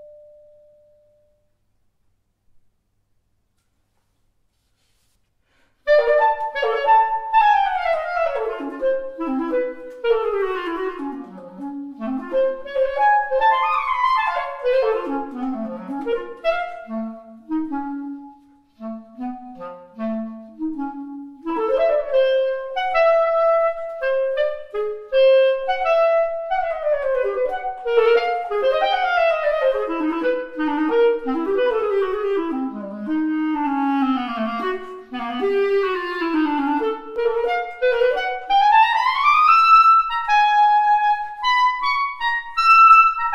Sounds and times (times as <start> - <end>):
Clarinet: 5.7 - 43.3
Brass instrument: 5.9 - 43.3.